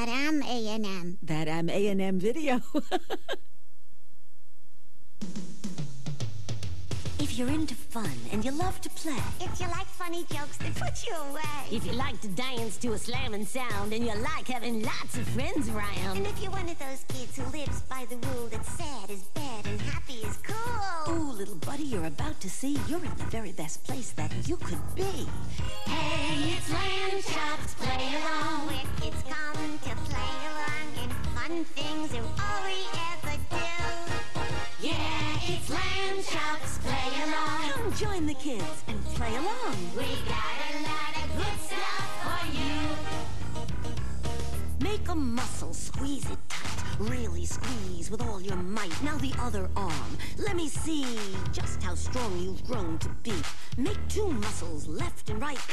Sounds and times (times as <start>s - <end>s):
Speech: 0.0s - 2.8s, 7.2s - 25.4s, 37.7s - 40.1s, 44.8s - 55.7s
Music: 5.2s - 55.7s.